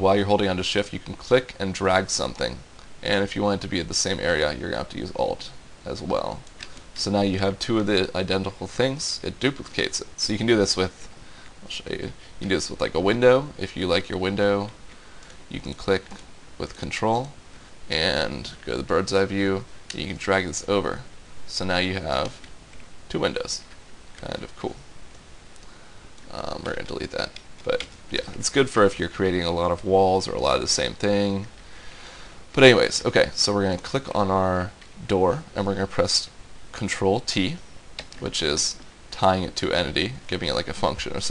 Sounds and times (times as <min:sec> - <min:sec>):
Speech: 0:00.0 - 0:06.4, 0:07.0 - 0:14.8, 0:15.5 - 0:22.4, 0:23.1 - 0:24.8, 0:26.3 - 0:31.5, 0:32.6 - 0:37.6, 0:38.2 - 0:41.3.